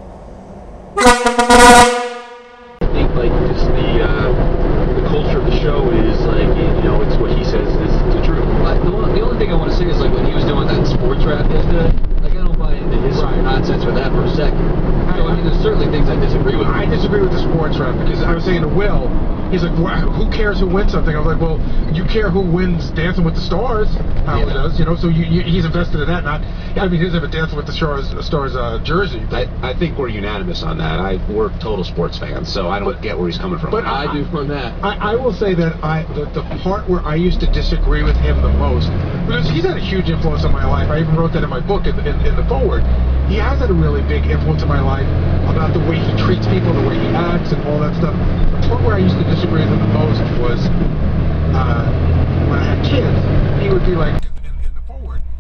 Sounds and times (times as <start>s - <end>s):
Truck: 0.0s - 55.4s
Speech: 2.8s - 50.8s, 51.5s - 55.3s.